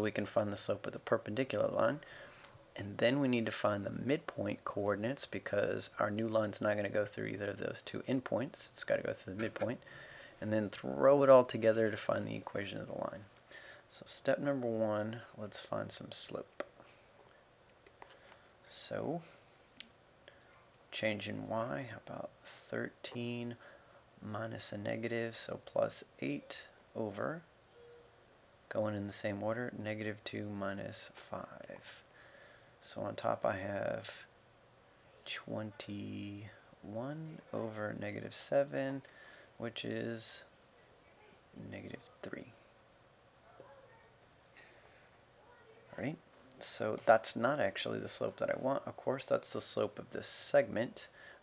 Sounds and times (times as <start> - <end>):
Speech: 0.0 - 2.1, 2.8 - 13.3, 13.9 - 16.6, 18.7 - 19.4, 20.9 - 23.6, 24.2 - 27.5, 28.7 - 32.0, 32.8 - 34.3, 35.2 - 42.7, 45.4 - 51.2.